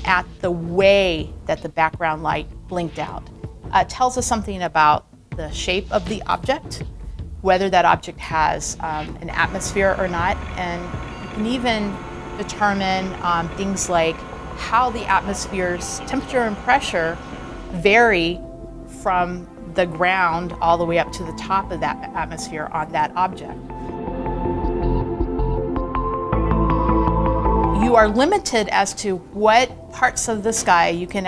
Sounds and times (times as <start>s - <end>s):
Speech: 0.0s - 6.8s, 7.4s - 17.2s, 17.8s - 18.4s, 19.0s - 23.6s, 27.8s - 31.2s
Music: 0.0s - 31.2s.